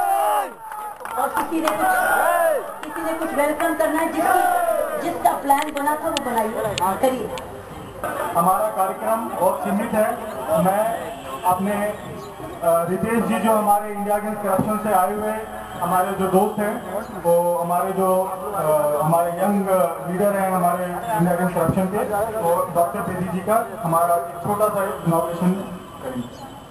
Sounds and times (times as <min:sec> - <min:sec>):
Male speech, man speaking: 0:08.2 - 0:26.3
Narration, monologue: 0:08.4 - 0:26.2.